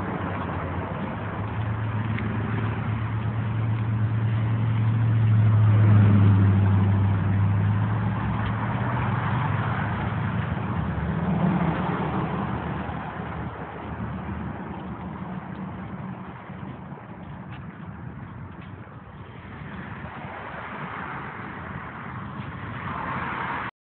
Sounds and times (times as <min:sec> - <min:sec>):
Car: 0:00.0 - 0:23.7.